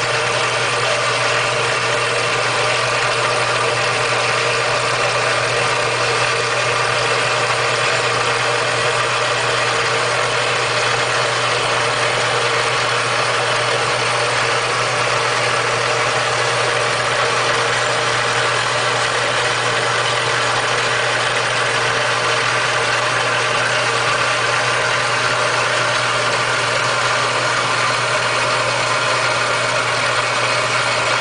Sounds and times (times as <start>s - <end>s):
Idling: 0.0s - 31.2s.